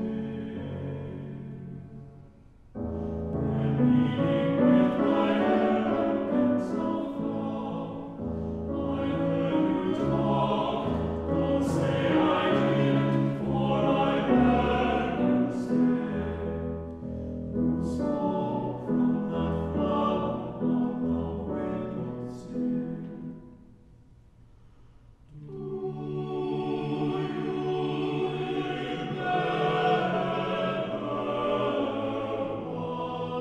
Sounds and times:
Music: 0:00.0 - 0:33.4.

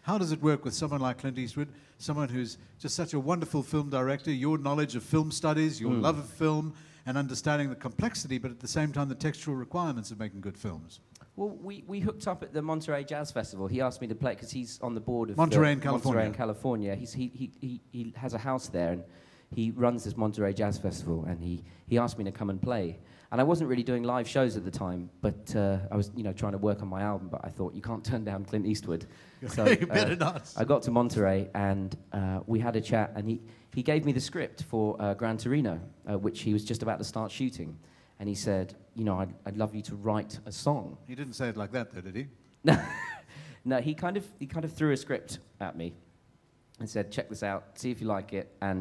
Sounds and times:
Speech: 0:00.0 - 0:42.4, 0:43.6 - 0:46.0, 0:46.8 - 0:48.8.

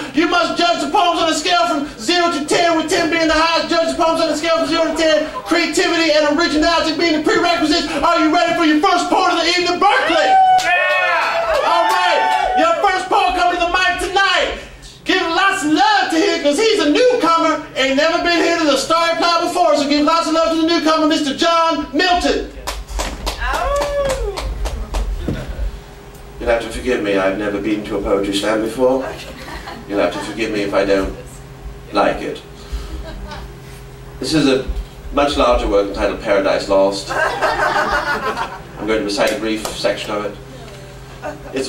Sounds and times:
Speech: 0:00.0 - 0:10.3, 0:11.7 - 0:22.6, 0:26.4 - 0:32.5, 0:34.2 - 0:37.1, 0:38.8 - 0:40.9.

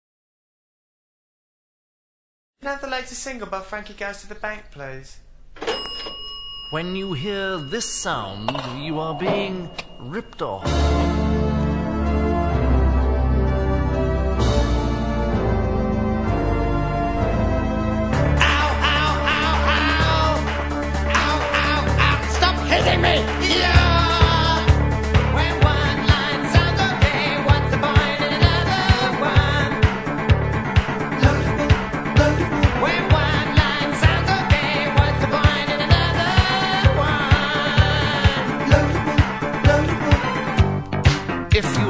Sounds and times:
Music: 0:08.5 - 0:41.9.

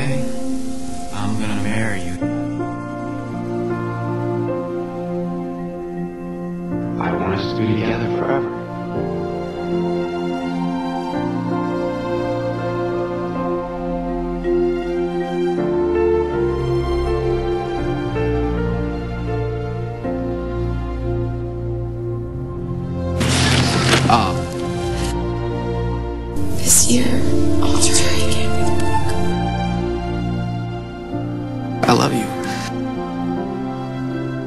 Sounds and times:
Speech: 0:00.0 - 0:00.2, 0:01.1 - 0:02.2, 0:07.0 - 0:08.5, 0:26.4 - 0:28.9, 0:31.8 - 0:32.7
Sad music: 0:00.0 - 0:34.4.

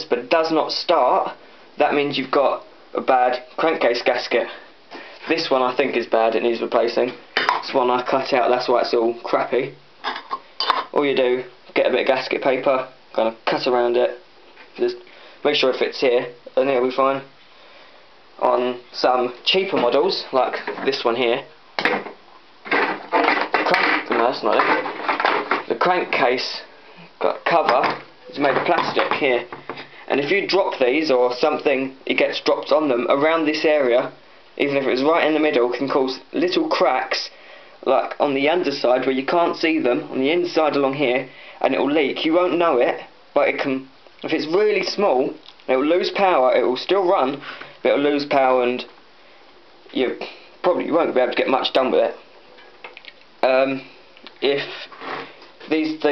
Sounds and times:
Speech: 0:00.0 - 0:04.6, 0:05.2 - 0:09.8, 0:10.9 - 0:14.2, 0:14.8 - 0:17.3, 0:18.4 - 0:21.5, 0:23.2 - 0:24.9, 0:25.6 - 0:49.0, 0:49.9 - 0:52.2, 0:53.4 - 0:54.9, 0:55.6 - 0:56.1.

